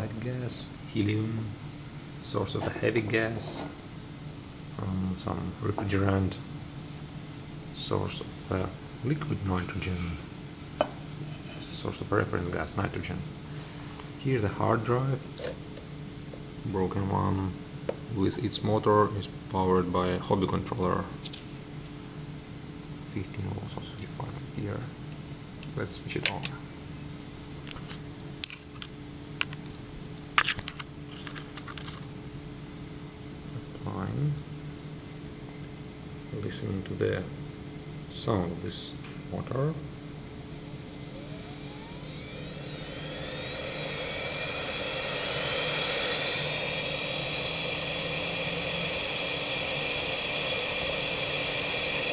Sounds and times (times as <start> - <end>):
Speech: 0.0 - 1.6, 2.2 - 3.8, 4.8 - 6.5, 7.8 - 10.3, 11.5 - 13.4, 14.2 - 15.6, 16.6 - 21.2, 23.1 - 25.0, 25.7 - 26.6, 33.6 - 34.5, 36.3 - 37.4, 38.1 - 39.8.